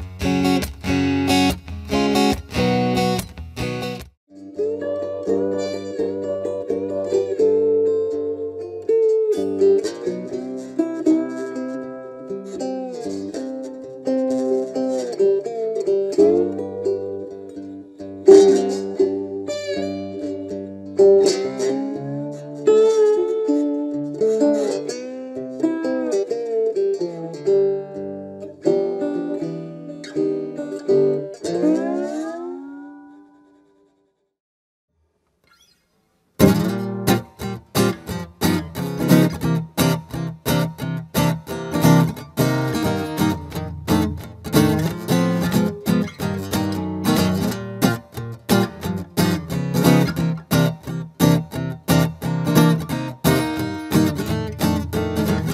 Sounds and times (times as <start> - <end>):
Acoustic guitar: 0.0 - 33.2, 35.5 - 55.5.